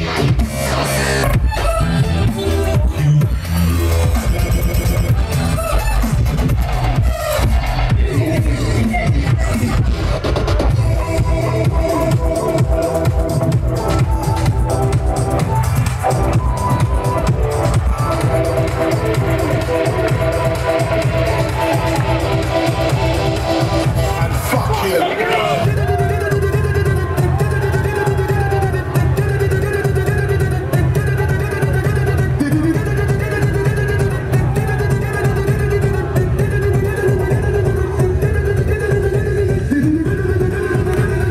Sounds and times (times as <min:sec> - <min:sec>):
Rock and roll: 0:00.0 - 0:41.3.